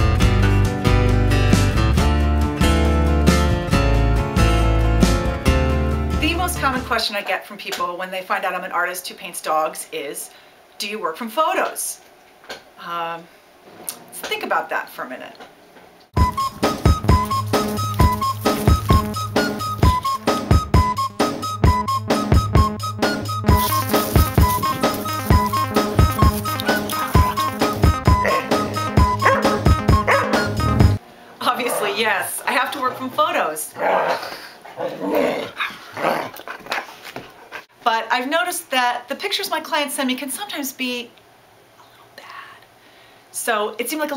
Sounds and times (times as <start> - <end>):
Music: 0.0 - 7.0, 16.2 - 31.0
Speech: 6.2 - 12.0, 12.8 - 13.3, 14.2 - 15.4, 31.4 - 33.8, 37.8 - 41.2, 43.4 - 44.1
Bow-wow: 28.2 - 28.5, 29.2 - 30.4.